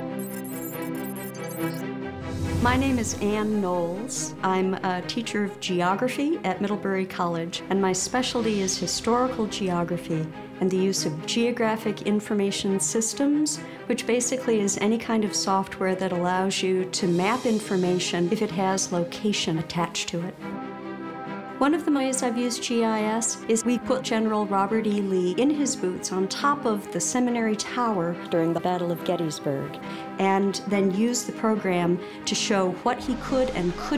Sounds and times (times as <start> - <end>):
Music: 0.0 - 33.9
Speech: 2.6 - 20.4, 21.6 - 33.9.